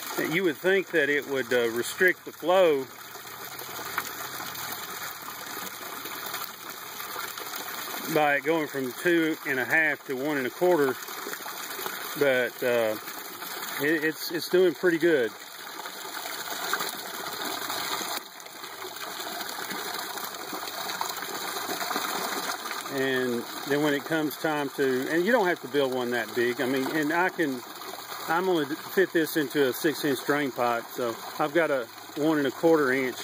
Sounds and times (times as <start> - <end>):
Gush: 0.0 - 33.2
Speech: 0.2 - 2.9, 8.0 - 11.0, 12.2 - 13.0, 13.8 - 15.4, 22.9 - 27.6, 28.3 - 33.2.